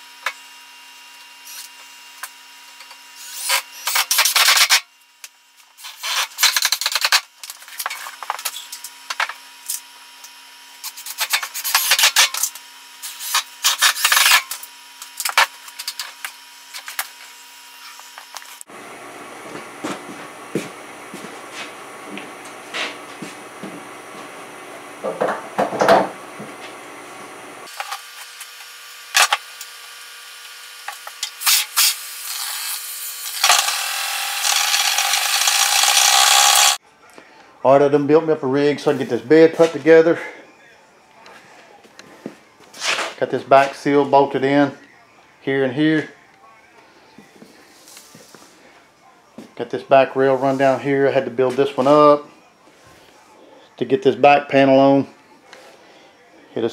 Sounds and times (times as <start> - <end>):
Tools: 2.8 - 4.9, 5.8 - 9.8, 10.8 - 17.1, 30.9 - 36.8.